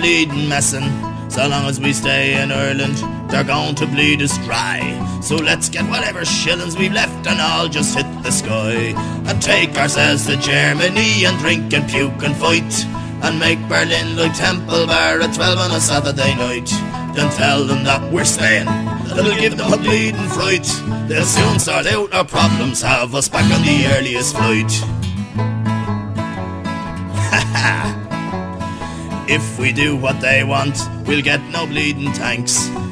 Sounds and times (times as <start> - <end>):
Music: 0.0 - 32.9.